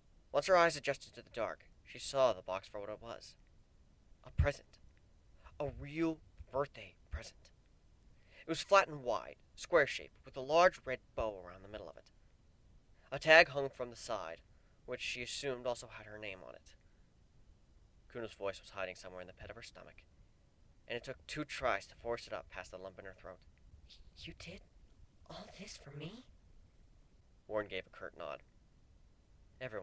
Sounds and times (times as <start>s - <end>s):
Whispering: 23.9s - 24.6s, 25.3s - 26.3s.